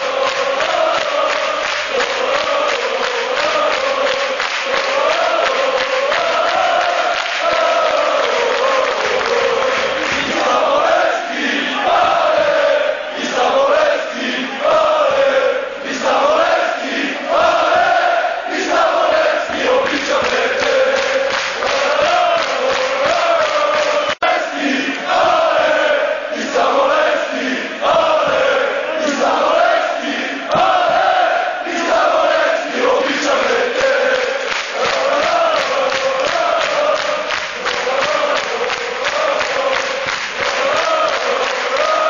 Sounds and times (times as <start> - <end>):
Male singing: 0.0 - 16.5, 18.6 - 27.3, 31.7 - 42.1.